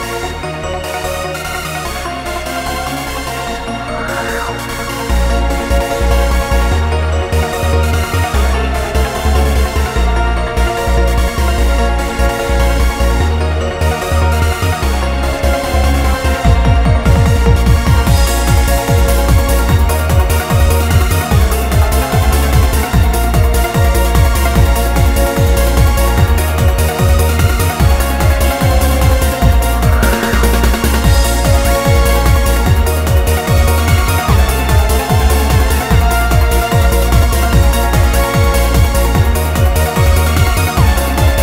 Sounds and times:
Techno: 0.0s - 41.4s.

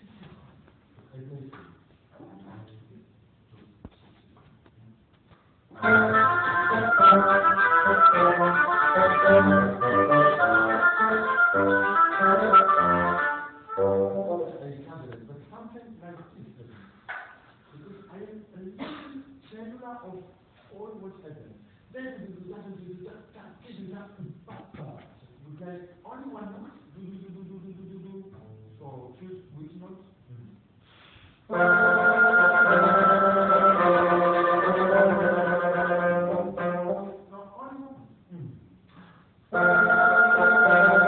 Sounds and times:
Speech: 1.1s - 3.8s, 14.4s - 16.9s, 17.7s - 30.6s, 37.3s - 38.7s
Classical music: 5.8s - 14.7s, 31.5s - 37.2s, 39.5s - 41.0s.

